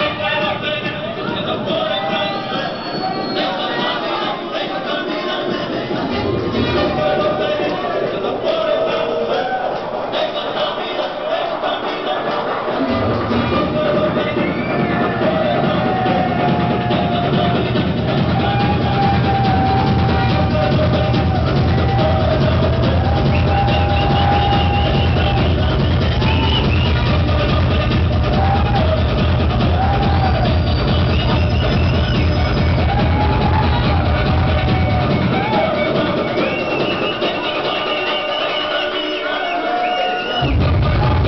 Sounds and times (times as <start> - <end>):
Techno: 0.0 - 41.2.